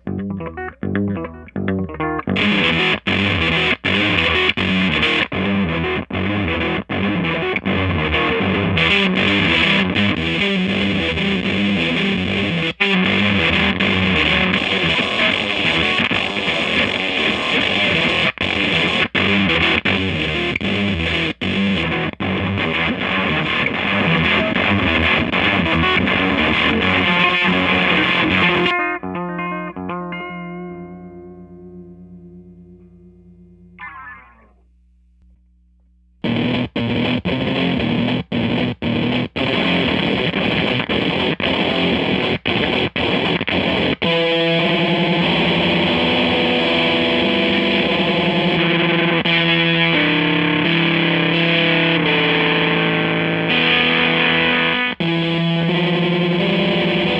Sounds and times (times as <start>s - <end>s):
Distortion: 0.0s - 57.1s
Effects unit: 0.0s - 57.1s
Guitar: 0.0s - 57.1s.